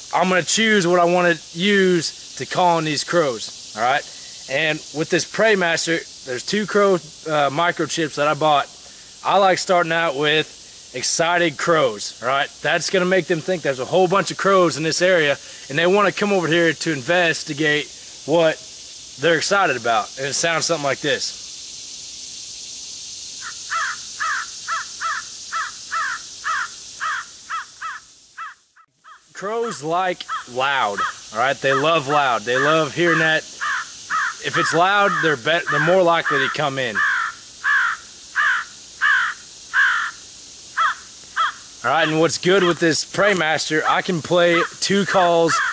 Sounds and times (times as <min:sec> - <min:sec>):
Caw: 0:23.4 - 0:29.3, 0:30.3 - 0:31.9, 0:33.6 - 0:40.2, 0:40.8 - 0:41.6, 0:45.5 - 0:45.7.